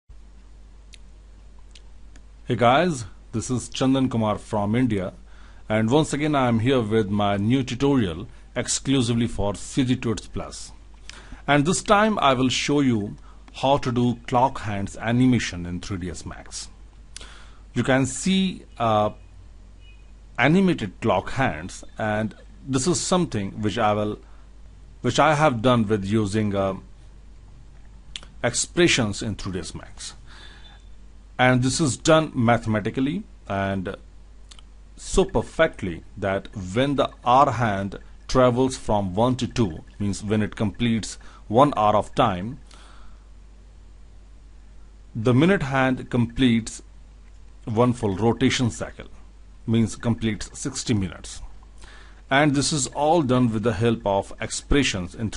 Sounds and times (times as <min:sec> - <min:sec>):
Inside, small room: 0:00.1 - 0:55.3
Speech: 0:02.5 - 0:10.8, 0:11.4 - 0:16.8, 0:17.8 - 0:19.2, 0:20.4 - 0:24.2, 0:25.0 - 0:26.9, 0:28.2 - 0:30.2, 0:31.4 - 0:42.6, 0:45.1 - 0:46.9, 0:47.6 - 0:51.5, 0:52.3 - 0:55.3.